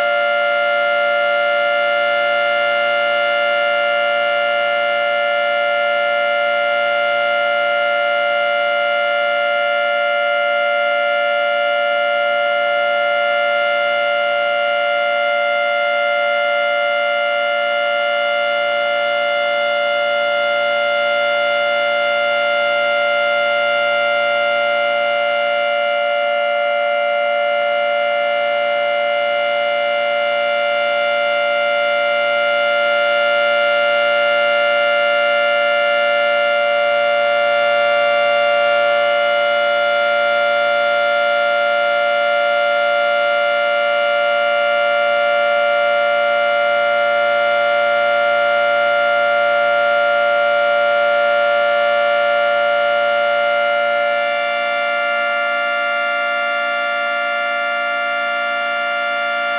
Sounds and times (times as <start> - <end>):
Civil defense siren: 0.0 - 59.5.